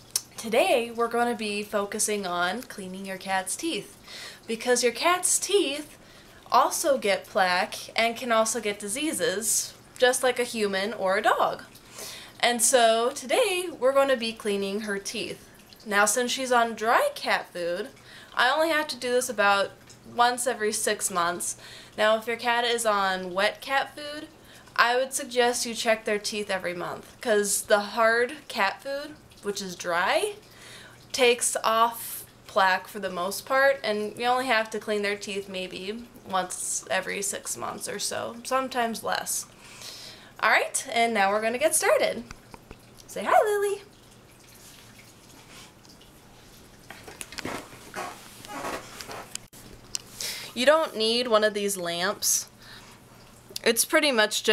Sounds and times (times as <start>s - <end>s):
Speech: 0.4s - 3.9s, 4.5s - 11.7s, 12.4s - 30.4s, 31.2s - 39.5s, 40.4s - 42.3s, 43.1s - 43.9s, 50.6s - 52.5s, 53.6s - 54.5s.